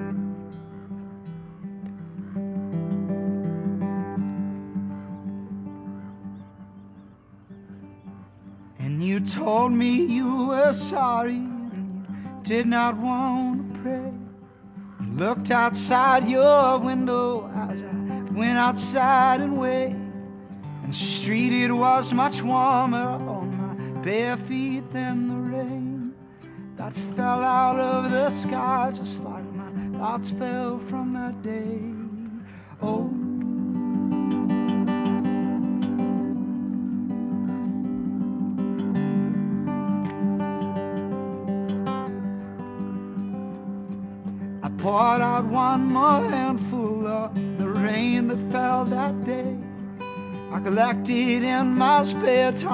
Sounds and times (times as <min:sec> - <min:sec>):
Music: 0:00.0 - 0:52.7.